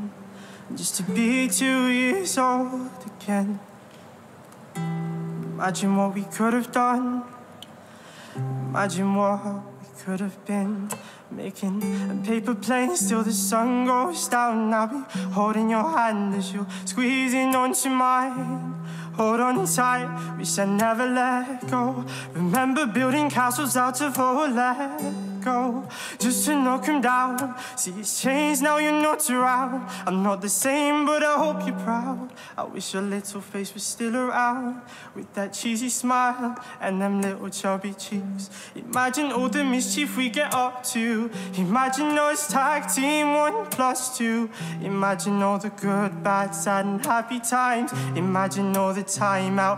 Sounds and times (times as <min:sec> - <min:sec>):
Music: 0:00.0 - 0:03.3, 0:04.8 - 0:07.4, 0:08.3 - 0:34.1, 0:35.5 - 0:49.7.